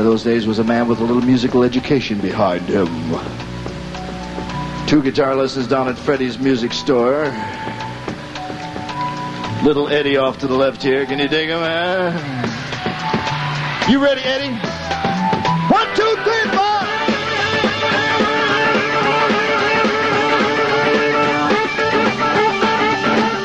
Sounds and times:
Speech: 0.0 - 3.3, 4.9 - 7.4, 9.6 - 12.2, 13.9 - 14.6, 15.7 - 16.8
Music: 0.0 - 23.4.

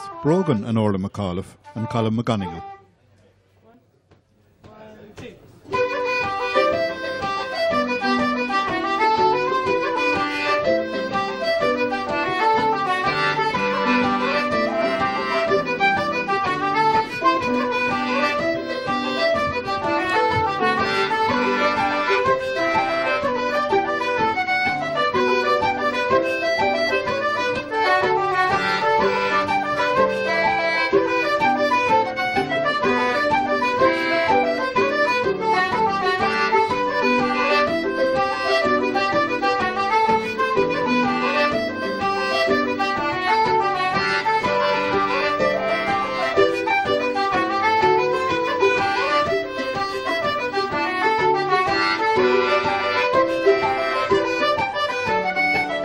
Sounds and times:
Traditional music: 0.0 - 2.9, 5.6 - 55.8
Flute: 5.7 - 55.8.

